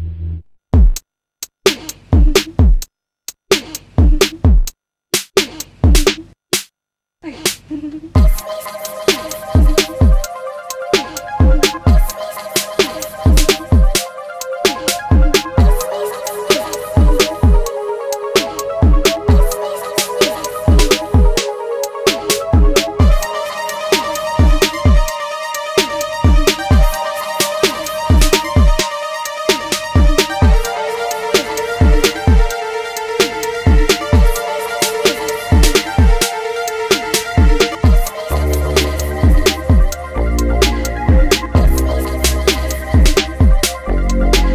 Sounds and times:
Drum machine: 0:00.7 - 0:44.5.

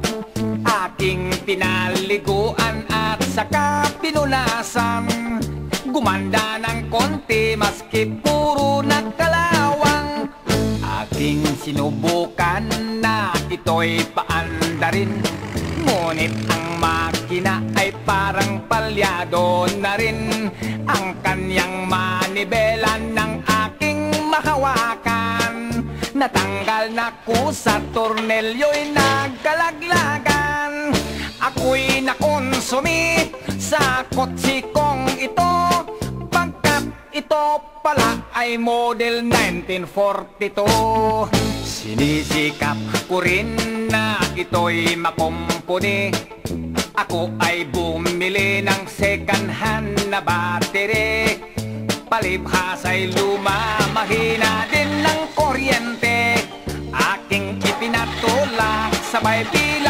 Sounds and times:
Funny music: 0:00.0 - 0:59.9.

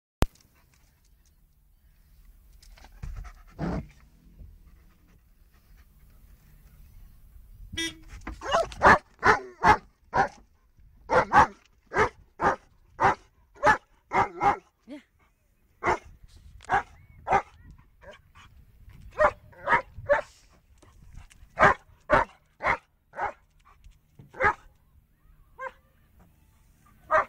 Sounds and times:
Vehicle horn, car horn, honking: 0:07.7 - 0:08.3.

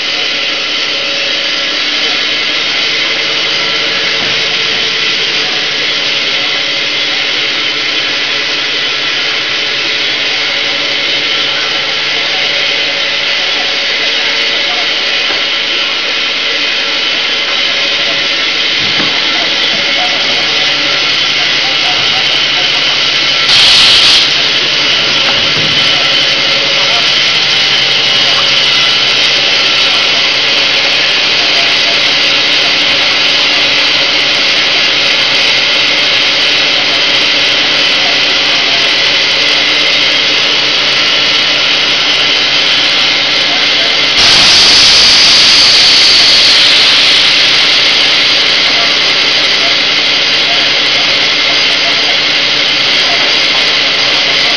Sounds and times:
Inside, large room or hall: 0:00.0 - 0:54.5.

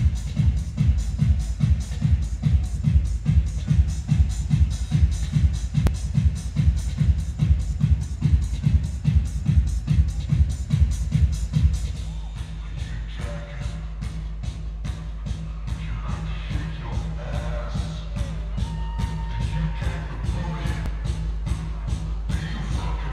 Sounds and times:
Techno: 0:00.0 - 0:23.1.

